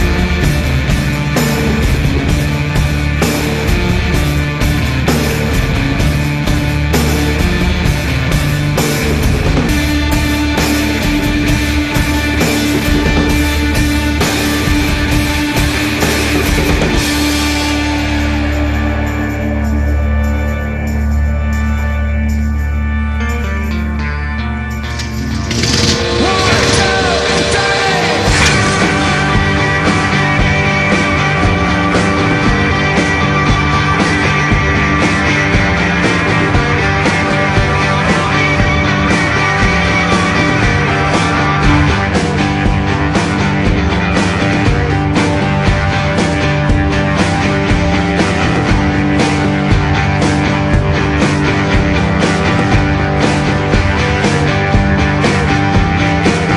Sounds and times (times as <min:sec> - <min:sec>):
Motorcycle: 0:00.0 - 0:56.5
Psychedelic rock: 0:00.0 - 0:56.5.